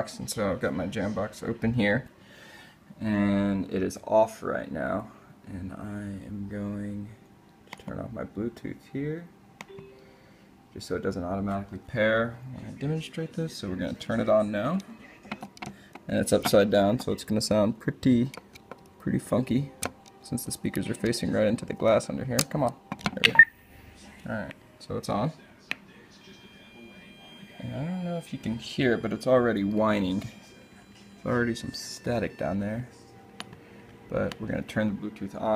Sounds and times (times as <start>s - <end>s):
Speech: 0.0s - 2.1s, 3.0s - 7.2s, 7.8s - 9.3s, 10.8s - 15.4s, 16.1s - 18.4s, 19.0s - 23.4s, 24.0s - 33.0s, 34.1s - 35.5s
Inside, small room: 0.0s - 35.5s
Music: 5.9s - 35.5s.